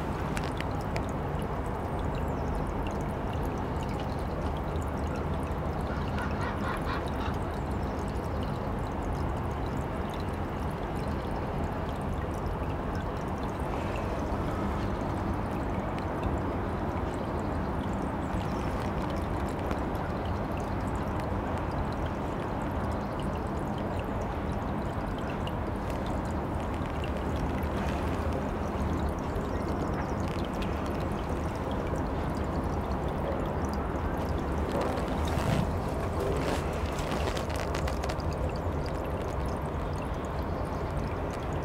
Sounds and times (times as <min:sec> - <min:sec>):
Liquid: 0:00.0 - 0:41.6.